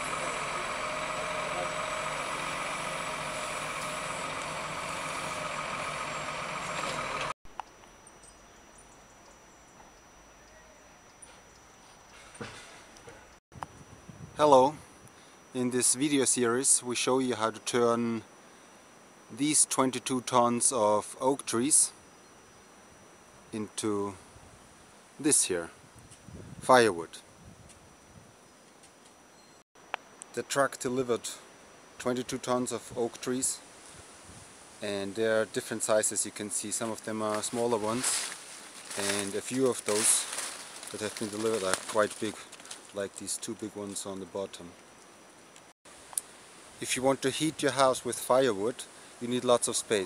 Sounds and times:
Speech: 14.4 - 14.8, 15.6 - 18.3, 19.3 - 22.0, 23.6 - 24.2, 25.2 - 25.8, 26.6 - 27.2, 30.4 - 31.4, 32.0 - 33.6, 34.8 - 38.2, 39.0 - 40.3, 40.9 - 44.8, 46.8 - 50.0.

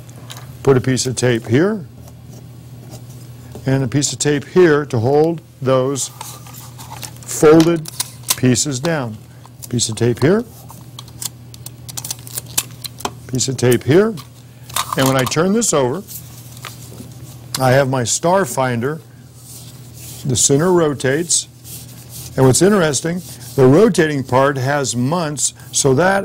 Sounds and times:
Speech: 0.6 - 1.9, 3.6 - 6.1, 7.3 - 10.5, 13.3 - 14.2, 15.0 - 16.1, 17.6 - 19.0, 20.2 - 21.5, 22.4 - 26.2.

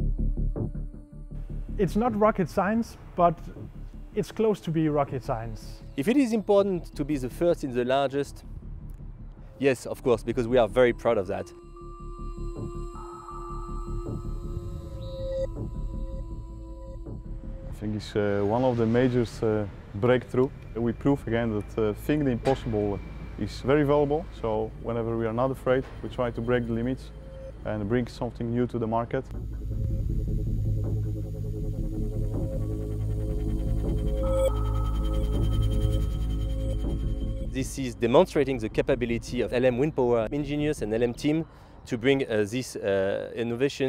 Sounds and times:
Music: 0.0 - 41.9
Speech: 1.8 - 3.6, 4.2 - 8.4, 9.6 - 11.5, 17.8 - 29.3, 37.6 - 43.8.

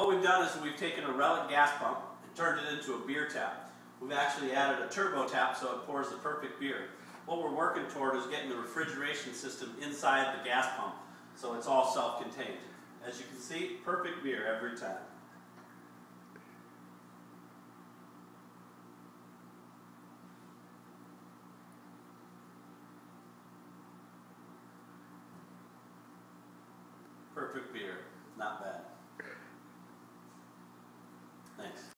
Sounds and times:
Speech: 0.0 - 15.2, 27.4 - 29.0, 31.5 - 31.9.

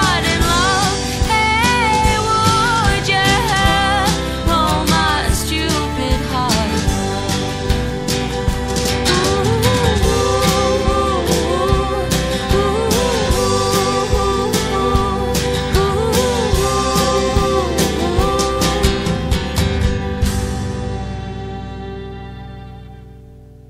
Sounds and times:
Christian music: 0.0 - 23.6.

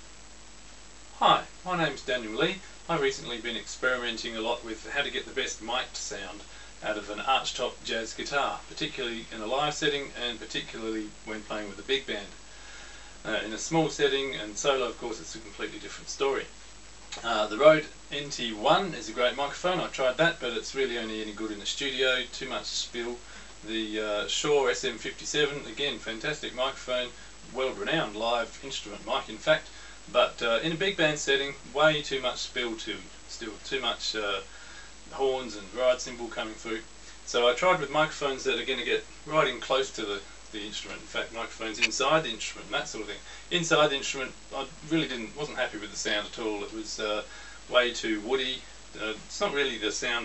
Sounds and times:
Speech: 1.2 - 12.4, 13.2 - 16.5, 17.1 - 34.5, 35.1 - 50.2.

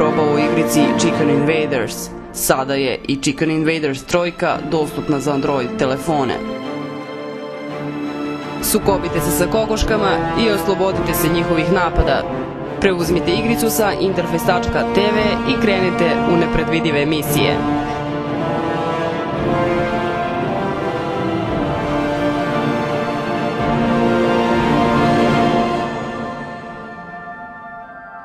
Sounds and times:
Speech: 0.0 - 6.5, 8.6 - 17.7
Music: 0.0 - 28.2.

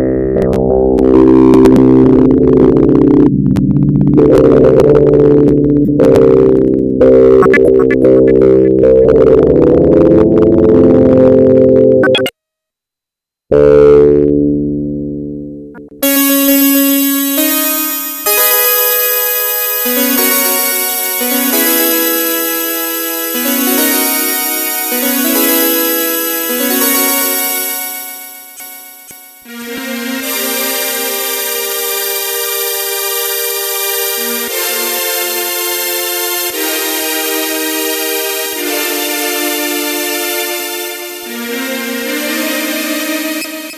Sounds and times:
Music: 0.0 - 12.4, 13.5 - 43.7.

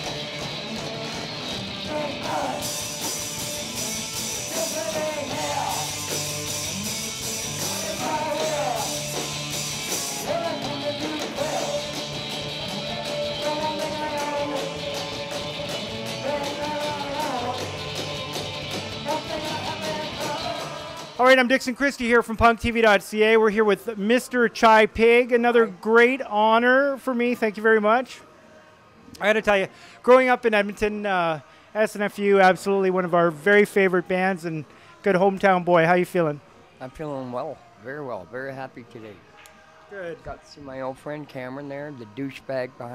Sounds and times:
Music: 0.0 - 42.9.

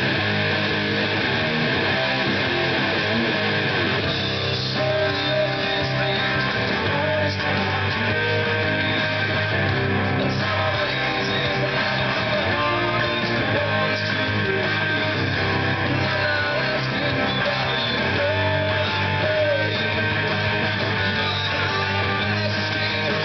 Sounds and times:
Electric guitar: 0.0 - 23.2.

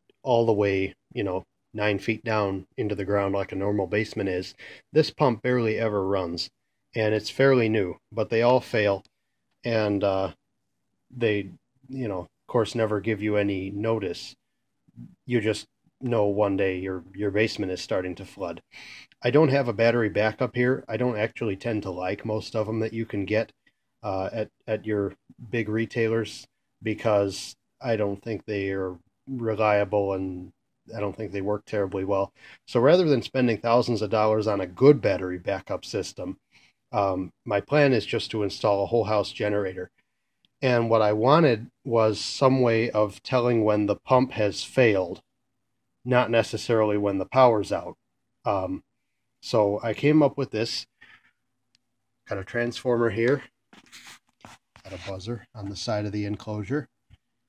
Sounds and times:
Speech: 0.2 - 10.4, 11.1 - 14.4, 15.0 - 40.0, 40.6 - 45.3, 46.0 - 51.0, 52.3 - 57.0.

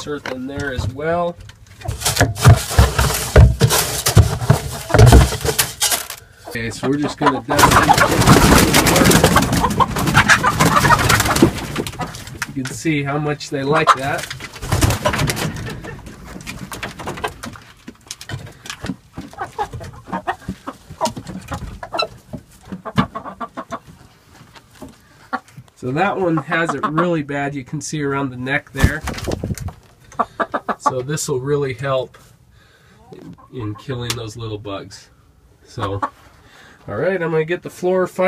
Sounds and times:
Speech: 0.0 - 1.4, 6.5 - 8.2, 12.6 - 14.3, 25.8 - 29.1, 30.8 - 32.2, 33.1 - 35.1, 35.7 - 36.1, 36.9 - 38.2
Outside, rural or natural: 1.4 - 6.5
Chicken, rooster: 6.4 - 12.3, 19.2 - 24.0, 25.2 - 27.2.

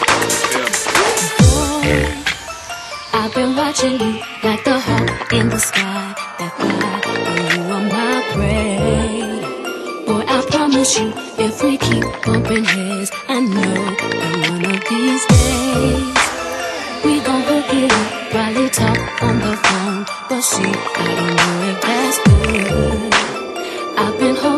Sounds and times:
Music: 0.0 - 24.5.

